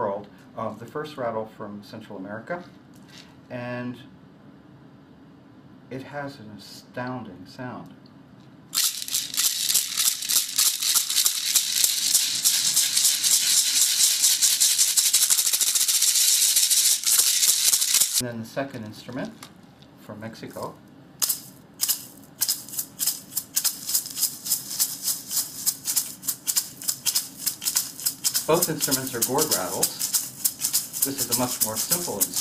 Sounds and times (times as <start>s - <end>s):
Speech: 0.0s - 2.8s, 3.5s - 4.1s, 5.9s - 8.0s, 18.2s - 19.4s, 20.0s - 20.8s, 28.5s - 30.0s, 31.0s - 32.4s
Inside, small room: 0.0s - 32.4s
Rattle (instrument): 8.7s - 18.2s, 21.2s - 32.4s.